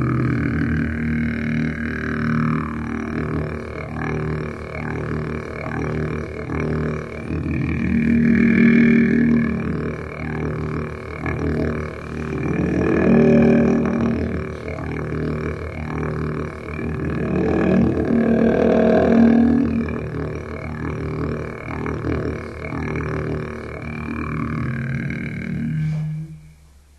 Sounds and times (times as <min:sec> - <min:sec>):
Didgeridoo: 0:00.0 - 0:26.8.